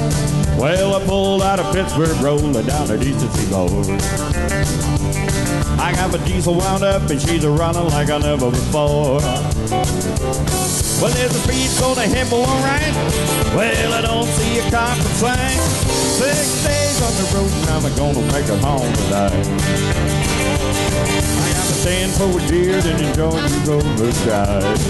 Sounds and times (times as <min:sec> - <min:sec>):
Country: 0:00.0 - 0:24.9.